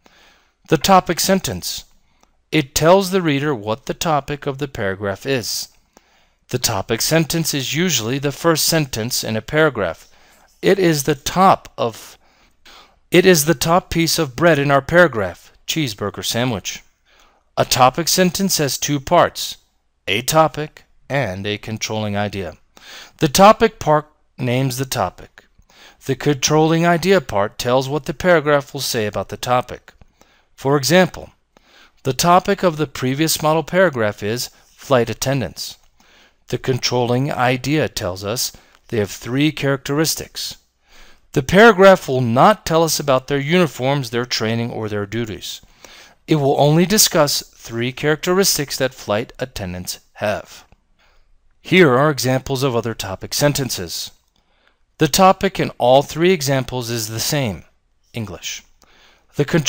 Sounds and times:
Speech: 0.7 - 1.9, 2.5 - 5.8, 6.5 - 12.2, 13.1 - 16.9, 17.6 - 22.6, 23.2 - 30.0, 30.6 - 31.4, 32.0 - 35.8, 36.5 - 40.6, 41.3 - 50.7, 51.6 - 54.2, 55.0 - 58.7, 59.3 - 59.6.

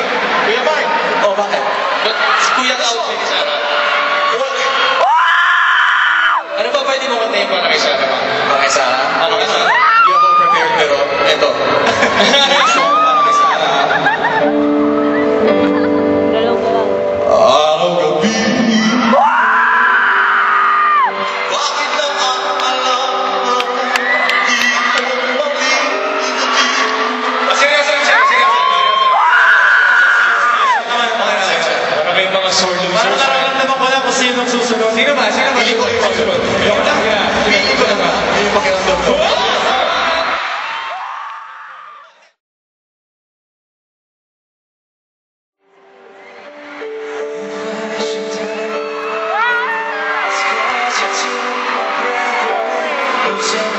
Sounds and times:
Music: 0.0 - 40.4, 45.6 - 53.7
Inside, large room or hall: 0.0 - 42.4, 45.6 - 53.7
Singing: 21.3 - 29.1, 46.8 - 53.7.

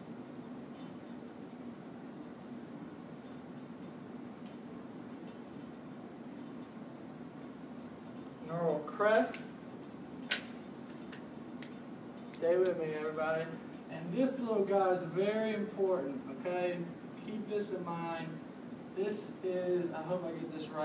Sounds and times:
Speech: 8.4 - 9.5, 12.3 - 18.4, 19.0 - 20.8.

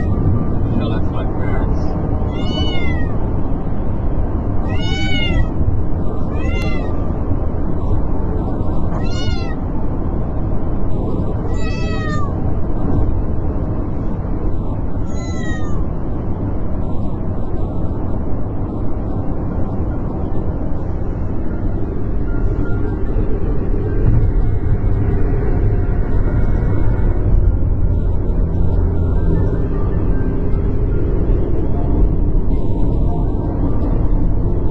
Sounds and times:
Motor vehicle (road): 0.0 - 34.7.

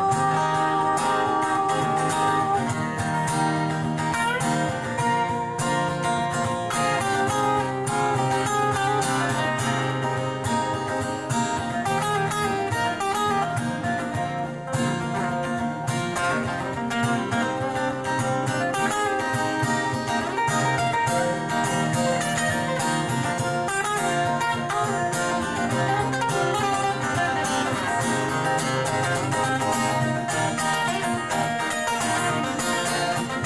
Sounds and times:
Acoustic guitar: 0.0 - 33.4
Strum: 0.0 - 33.4.

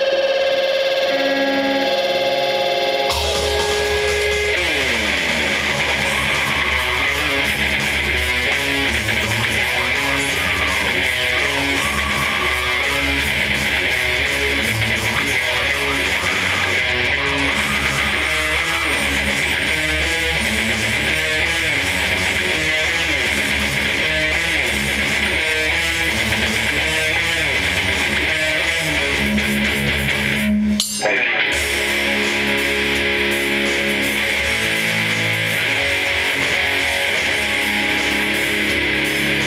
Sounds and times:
Bass guitar: 0.0 - 39.4.

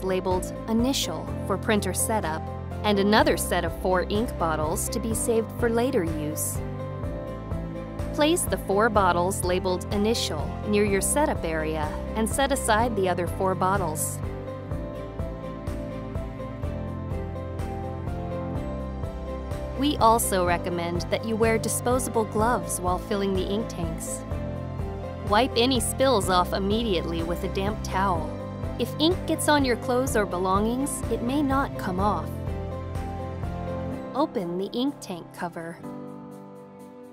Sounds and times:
Speech: 0.0 - 6.6, 8.2 - 14.2, 19.8 - 24.2, 25.3 - 32.3, 34.2 - 35.8
Music: 0.0 - 37.1.

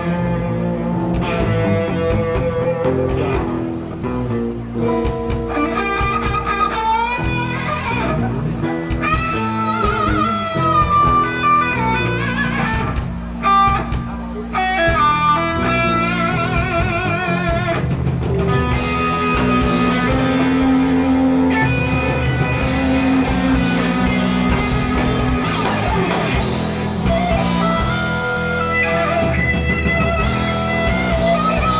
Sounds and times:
Guitar: 0.0 - 31.7.

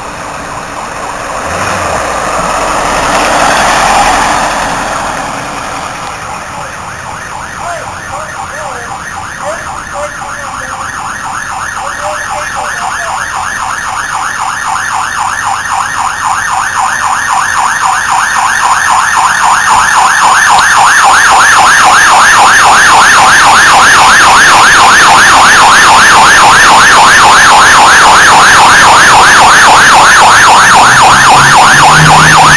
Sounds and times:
Vehicle: 0.0 - 32.5
Speech: 7.6 - 11.0, 11.8 - 13.3.

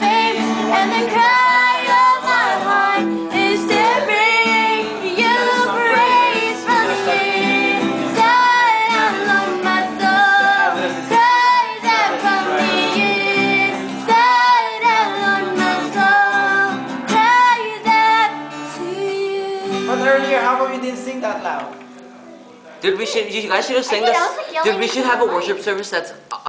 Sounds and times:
Music: 0.0 - 22.8.

